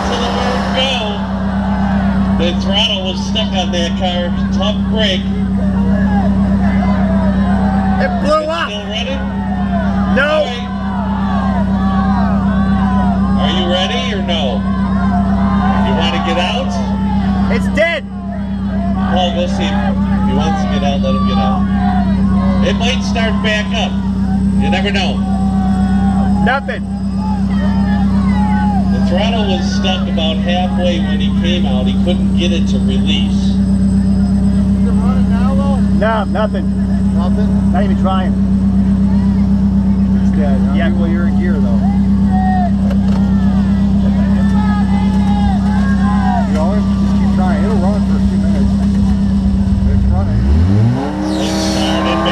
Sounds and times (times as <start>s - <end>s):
Speech: 0.0s - 1.2s, 2.4s - 6.2s, 8.0s - 9.3s, 10.1s - 10.7s, 13.4s - 14.6s, 15.8s - 16.9s, 17.5s - 18.1s, 19.0s - 21.7s, 22.5s - 24.0s, 24.6s - 25.2s, 26.3s - 26.8s, 28.8s - 33.6s, 34.8s - 38.4s, 40.1s - 42.1s, 43.8s - 49.2s, 51.8s - 52.3s
Vehicle: 0.0s - 52.3s.